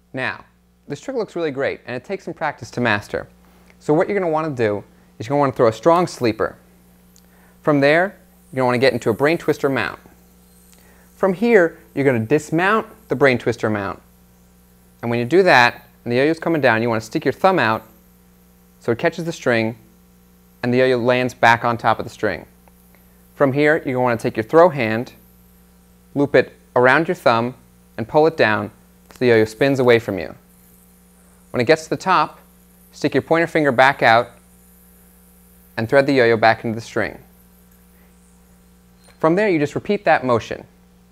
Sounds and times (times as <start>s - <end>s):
Speech: 0.1s - 6.6s, 7.7s - 10.1s, 11.2s - 14.0s, 15.0s - 17.9s, 18.8s - 19.8s, 20.6s - 22.5s, 23.4s - 25.2s, 26.2s - 30.4s, 31.6s - 32.4s, 33.0s - 34.4s, 35.8s - 37.3s, 39.2s - 40.8s.